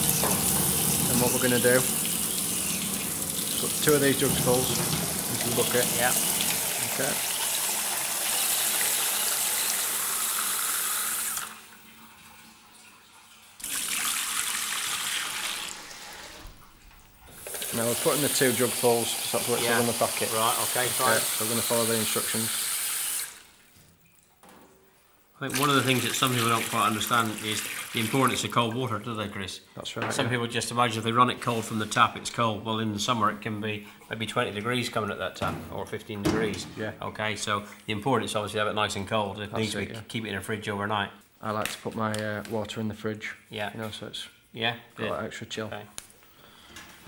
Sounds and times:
Water tap, faucet: 0.0 - 16.6, 17.3 - 23.8, 25.5 - 28.6
Water: 0.0 - 22.4, 25.5 - 28.5.

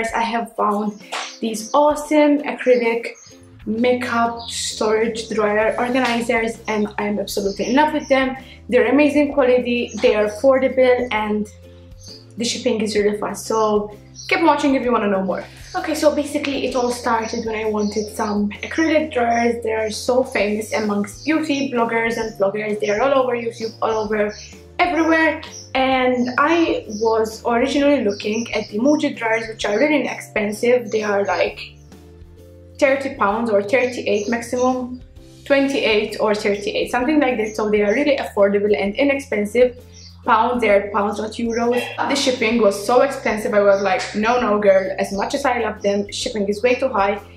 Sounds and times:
Speech: 0.0 - 11.6, 12.4 - 31.7, 32.8 - 47.3
Music: 0.0 - 47.3.

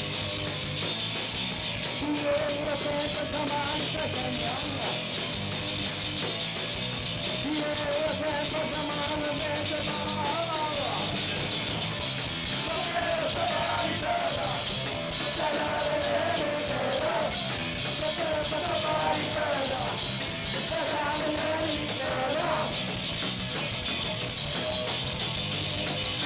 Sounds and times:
Music: 0.0 - 26.2.

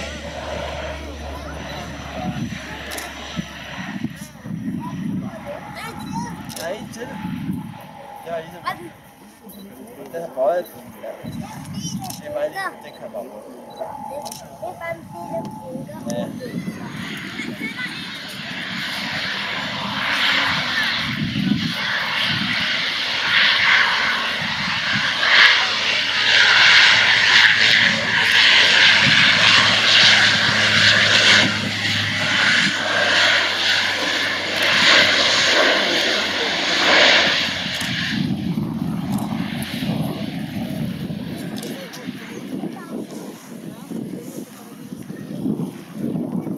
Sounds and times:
Fixed-wing aircraft, airplane: 0.0 - 46.5
Propeller, airscrew: 0.0 - 46.5.

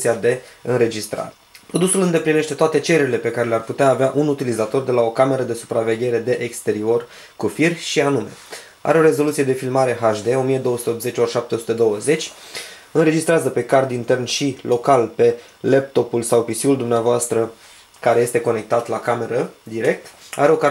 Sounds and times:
Speech: 0.0 - 12.4, 13.0 - 20.7.

